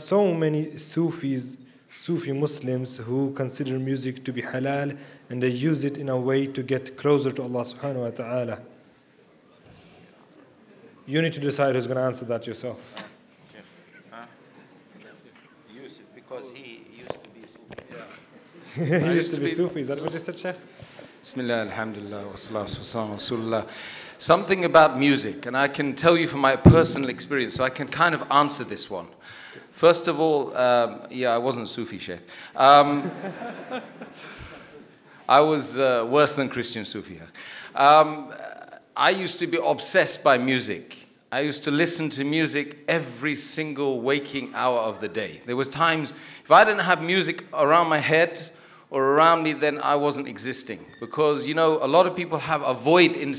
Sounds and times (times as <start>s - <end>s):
Speech: 0.0s - 8.7s, 11.1s - 12.9s, 15.0s - 18.2s, 18.8s - 20.6s, 21.2s - 29.1s, 29.8s - 33.1s, 35.3s - 53.3s.